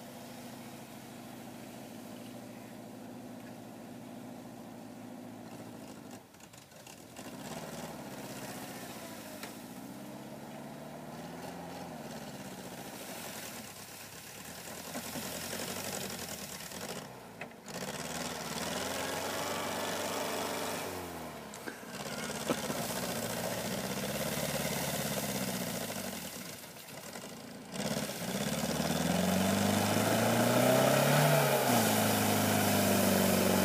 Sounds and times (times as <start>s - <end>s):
Vehicle: 0.0s - 33.6s.